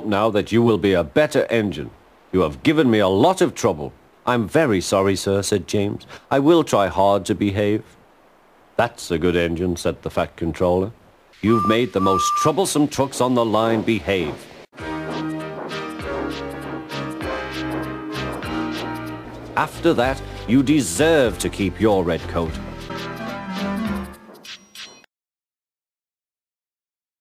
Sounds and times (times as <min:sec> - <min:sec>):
Narration, monologue: 0:00.0 - 0:14.7, 0:19.3 - 0:22.7
Music: 0:14.8 - 0:25.1.